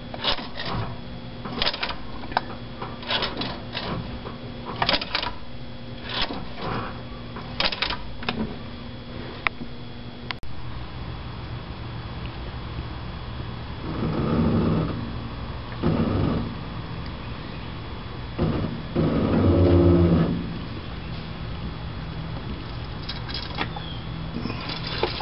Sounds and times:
Engine: 0.0s - 25.2s.

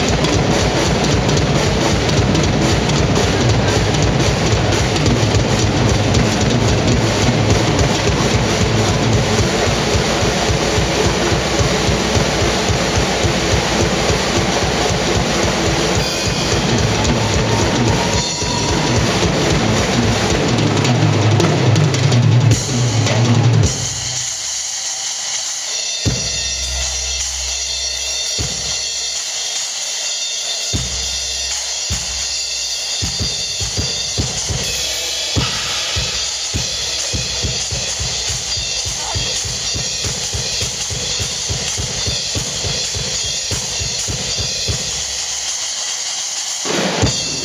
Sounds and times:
Drum: 0.0s - 47.4s
Drum kit: 0.0s - 47.4s
Inside, large room or hall: 0.0s - 47.4s.

